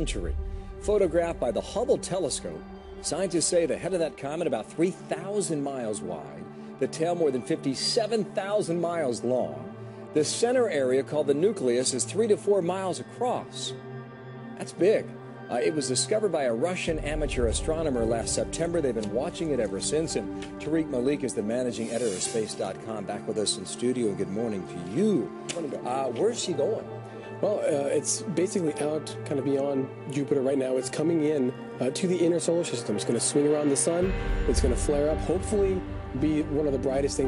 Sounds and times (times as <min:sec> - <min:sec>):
Speech: 0:00.0 - 0:13.8, 0:14.6 - 0:37.2.